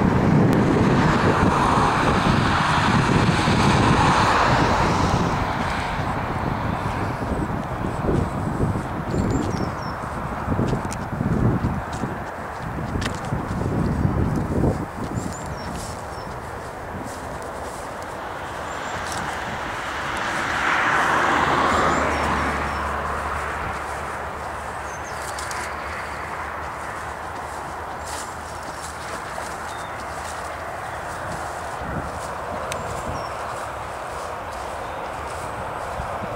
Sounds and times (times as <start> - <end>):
Walk, footsteps: 7.6 - 19.5, 21.2 - 36.3.